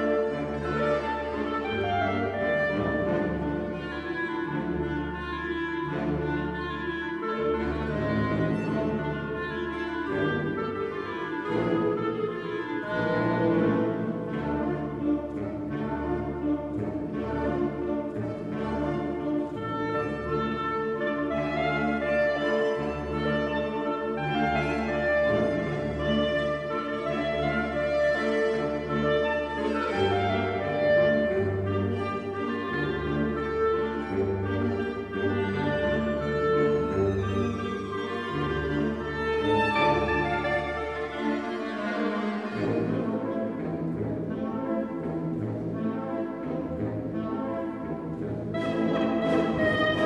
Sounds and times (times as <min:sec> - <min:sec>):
Orchestra: 0:00.0 - 0:50.0.